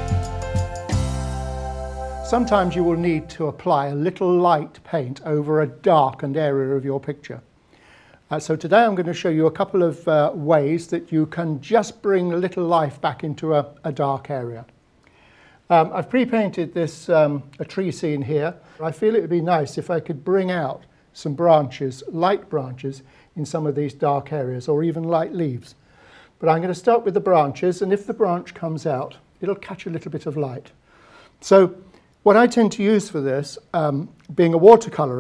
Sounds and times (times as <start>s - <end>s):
Speech: 2.3s - 7.5s, 8.3s - 14.7s, 15.7s - 25.8s, 26.4s - 30.8s, 31.4s - 35.2s.